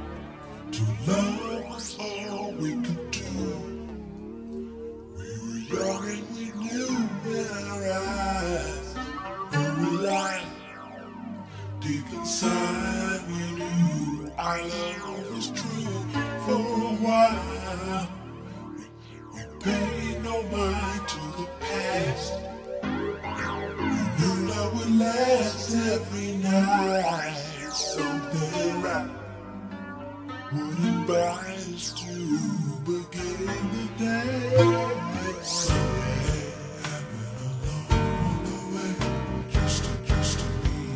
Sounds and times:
Music: 0.0 - 40.9.

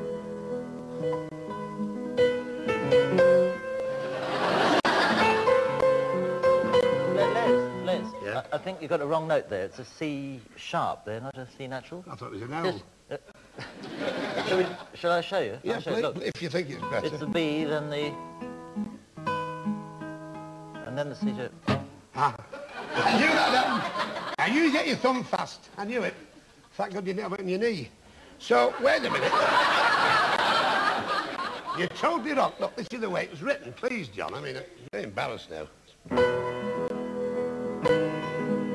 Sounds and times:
Guitar: 0.0 - 9.2, 15.7 - 24.0, 36.0 - 38.7.

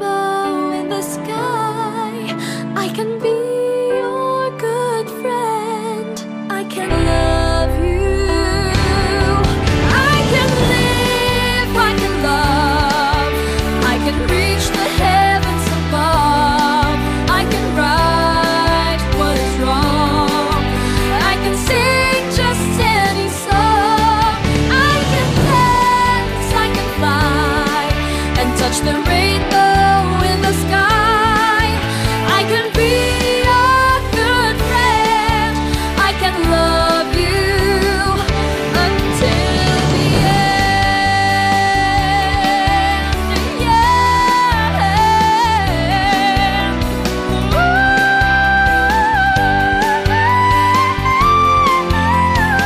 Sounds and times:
Pop music: 0.0 - 52.6.

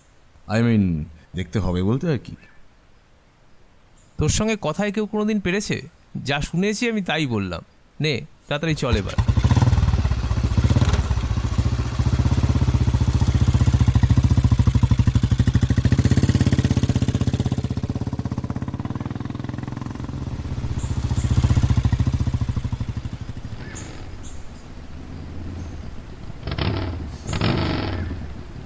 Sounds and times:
Outside, rural or natural: 0.0 - 28.6.

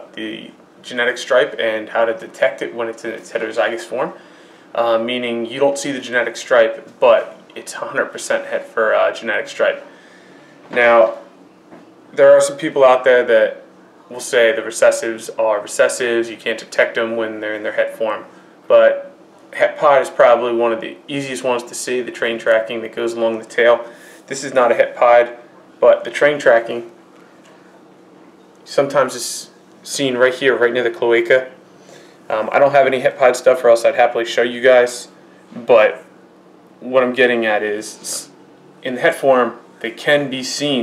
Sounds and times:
Speech: 0.0 - 4.2, 4.8 - 9.9, 10.7 - 11.3, 12.1 - 27.0, 28.6 - 31.6, 32.3 - 36.1, 36.8 - 40.8
Inside, small room: 0.0 - 40.8.

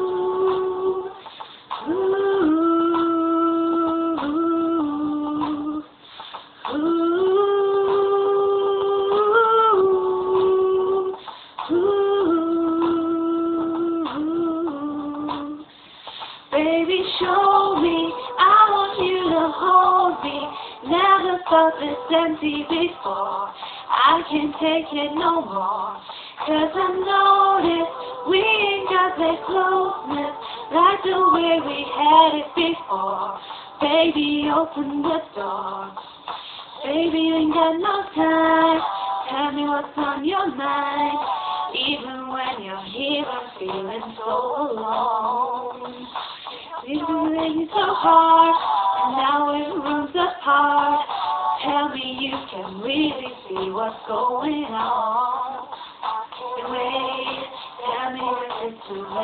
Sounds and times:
Female singing: 0.0 - 6.0, 6.7 - 15.7, 16.5 - 36.0, 36.8 - 59.2.

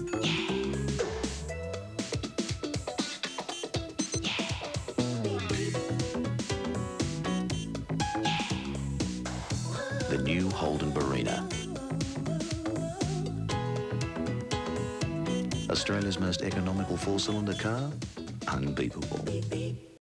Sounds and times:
Music: 0.0 - 20.0
Speech: 10.0 - 11.5, 15.7 - 19.5.

